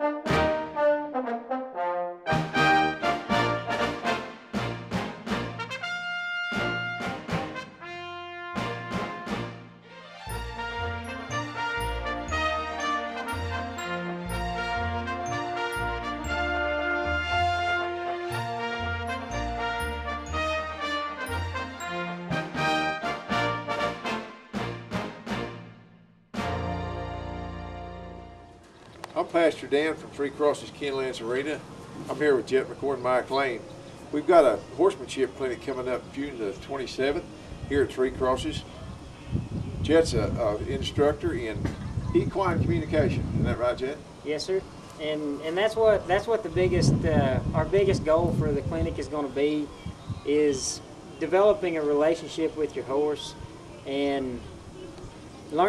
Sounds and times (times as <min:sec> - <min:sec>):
Music: 0:00.0 - 0:28.8
Speech: 0:29.2 - 0:38.7, 0:39.8 - 0:49.7, 0:50.3 - 0:54.4, 0:55.5 - 0:55.6.